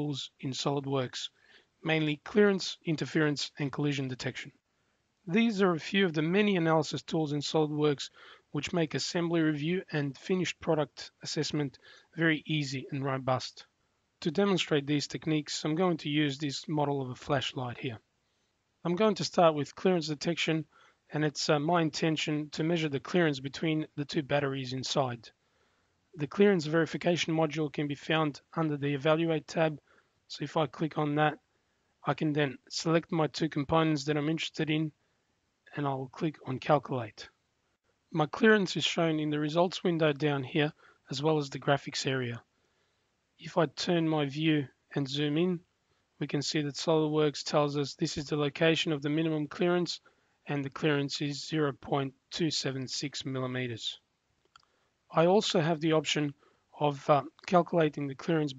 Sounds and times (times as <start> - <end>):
Speech: 0.0 - 4.6, 5.3 - 18.0, 18.8 - 25.4, 26.2 - 31.4, 32.0 - 35.0, 35.7 - 37.4, 38.2 - 42.5, 43.4 - 54.0, 55.1 - 58.5.